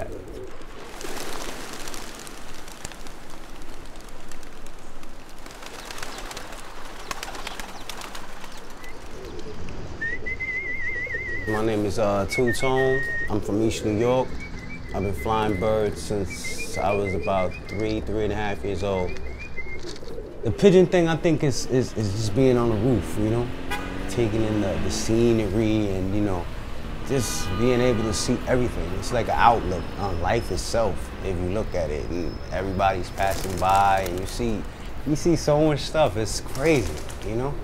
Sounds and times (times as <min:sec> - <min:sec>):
Chirp, tweet: 0:12.4 - 0:18.0.